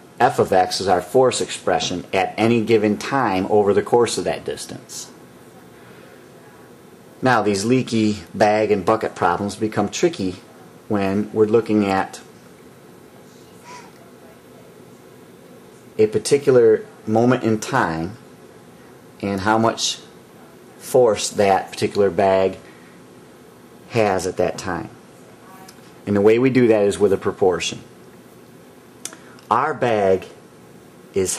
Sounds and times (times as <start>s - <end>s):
Inside, small room: 0.0s - 31.3s
Speech: 0.2s - 5.8s, 6.4s - 12.4s, 16.0s - 18.3s, 19.2s - 22.7s, 23.9s - 27.9s, 29.5s - 30.4s, 31.1s - 31.3s.